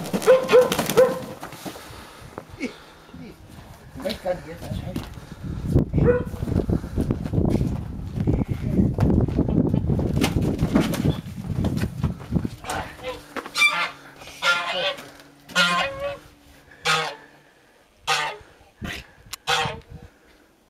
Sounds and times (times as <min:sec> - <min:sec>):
Honk: 0:12.7 - 0:16.2, 0:16.8 - 0:17.3, 0:18.1 - 0:18.5, 0:19.4 - 0:19.8.